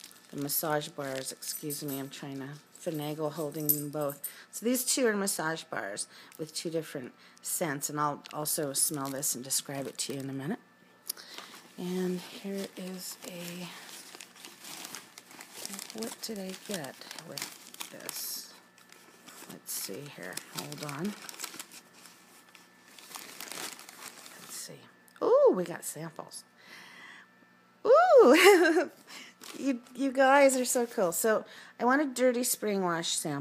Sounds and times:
Speech: 0.4s - 10.6s, 11.8s - 13.8s, 15.7s - 18.6s, 19.5s - 21.2s, 24.4s - 26.5s, 29.6s - 33.4s.

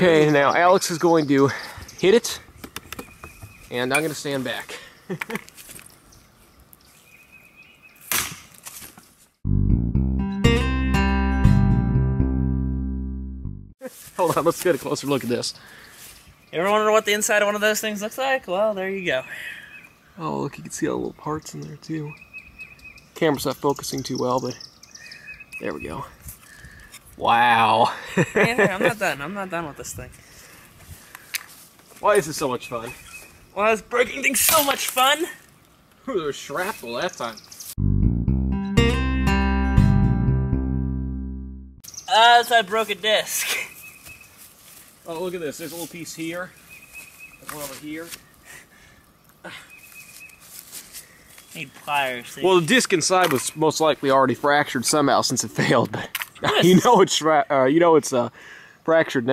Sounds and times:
Outside, rural or natural: 0.0s - 38.2s, 38.8s - 59.3s
Speech: 13.8s - 15.6s, 42.1s - 43.5s, 47.4s - 48.2s, 51.6s - 58.3s.

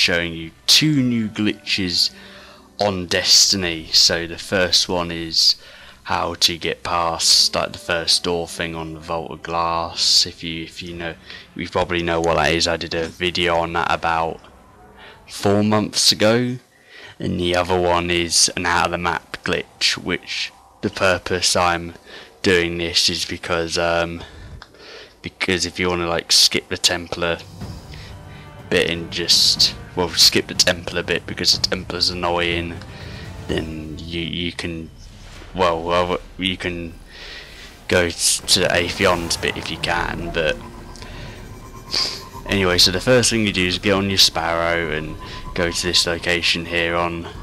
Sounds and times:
Speech: 0.0s - 2.2s, 2.8s - 14.5s, 15.3s - 24.5s, 25.2s - 27.5s, 28.6s - 32.9s, 33.5s - 37.1s, 37.9s - 40.7s, 41.9s - 47.4s
Music: 0.0s - 47.4s.

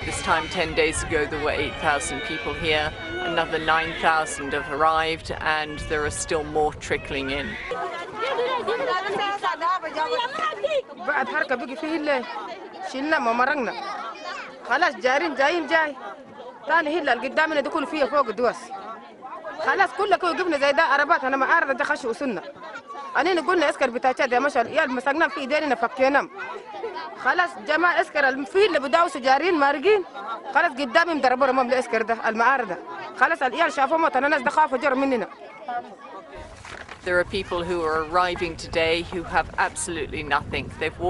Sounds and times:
Speech: 0.0s - 36.2s, 37.0s - 41.0s.

